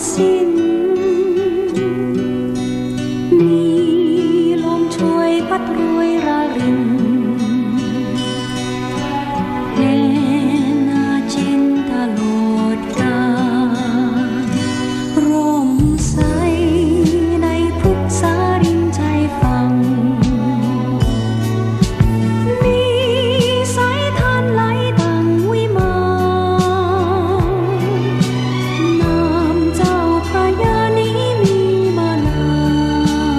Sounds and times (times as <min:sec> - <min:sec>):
Music: 0:00.0 - 0:33.3.